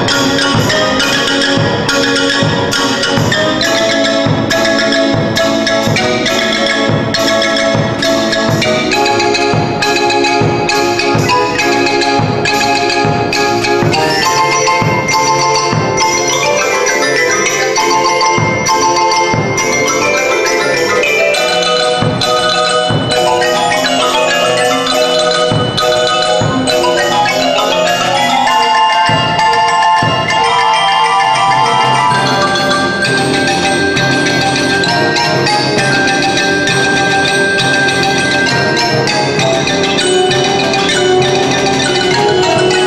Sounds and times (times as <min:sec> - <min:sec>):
Percussion: 0:00.0 - 0:42.8.